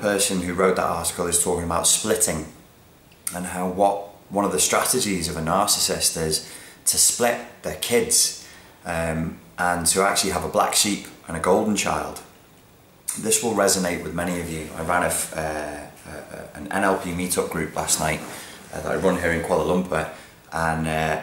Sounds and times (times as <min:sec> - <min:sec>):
Speech: 0:00.0 - 0:02.6, 0:03.3 - 0:12.3, 0:13.1 - 0:21.2.